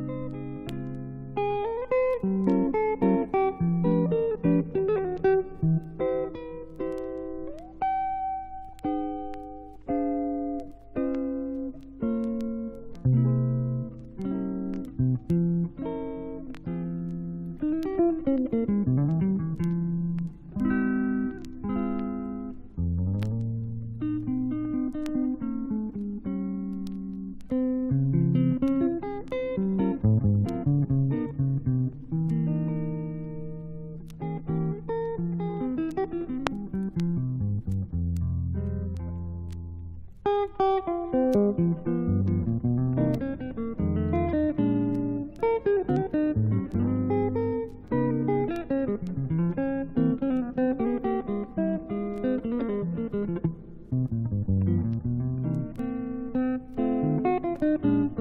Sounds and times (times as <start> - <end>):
Electric guitar: 0.0 - 58.2.